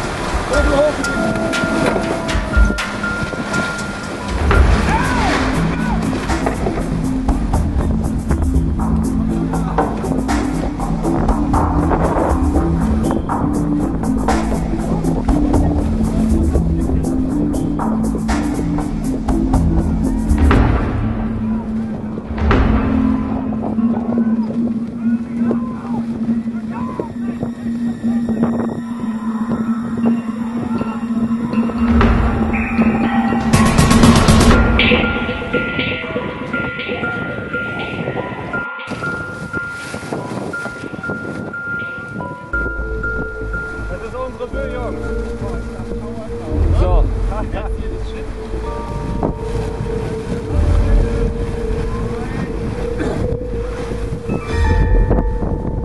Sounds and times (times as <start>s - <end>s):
Sailboat, sailing ship: 0.0s - 55.8s
Waves, surf: 0.0s - 55.8s
Wind noise (microphone): 24.0s - 43.3s, 46.5s - 55.8s.